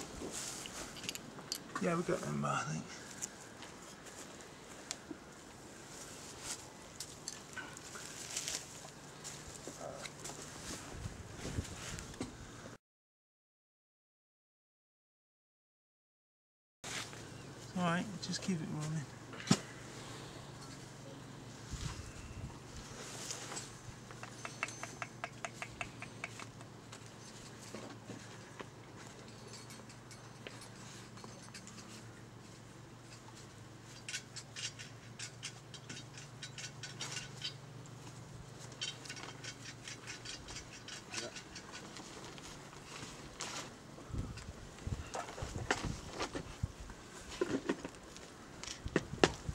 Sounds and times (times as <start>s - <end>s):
Speech: 1.8s - 3.0s, 17.7s - 19.1s.